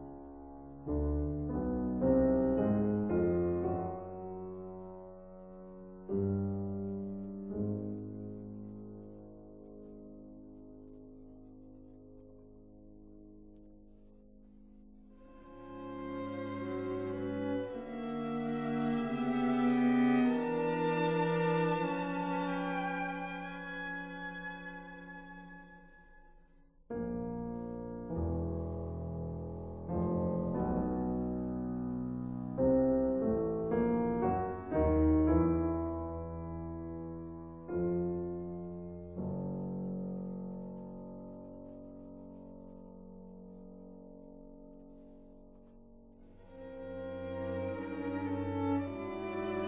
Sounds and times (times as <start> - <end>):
Music: 0.0 - 49.6.